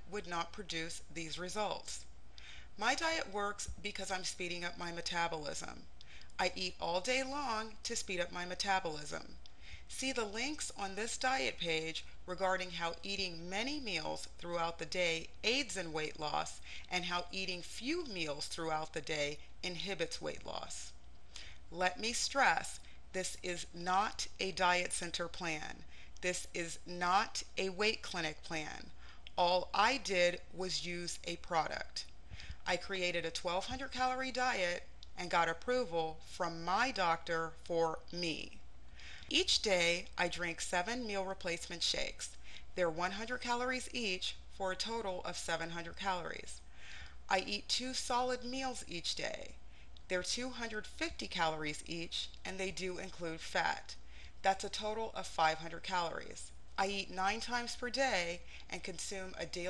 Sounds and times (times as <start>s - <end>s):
Speech: 0.0s - 2.0s, 2.8s - 5.8s, 6.4s - 20.9s, 21.8s - 38.6s, 39.3s - 46.6s, 47.3s - 59.6s.